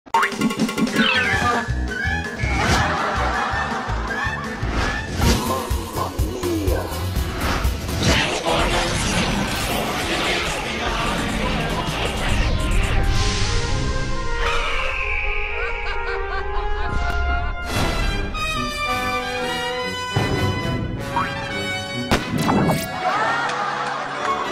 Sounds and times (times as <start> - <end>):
Music: 0.1 - 24.5
Laughter: 2.5 - 5.1, 15.6 - 17.3, 22.9 - 24.5.